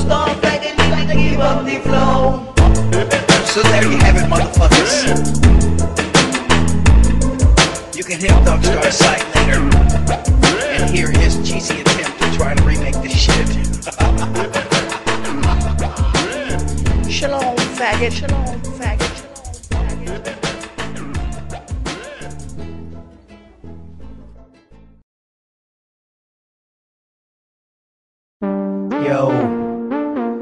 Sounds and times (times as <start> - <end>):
Hip hop music: 0.0 - 22.8, 28.4 - 30.4.